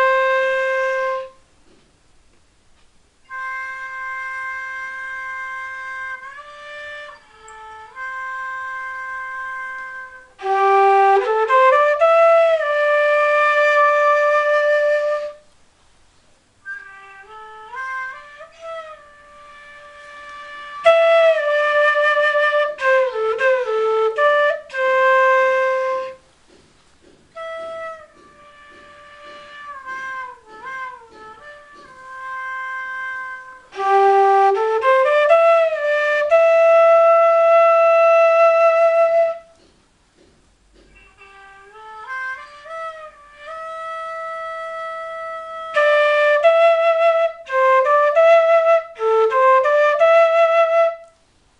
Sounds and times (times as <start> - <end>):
Music: 0.0 - 1.9, 3.2 - 15.6, 16.5 - 51.2.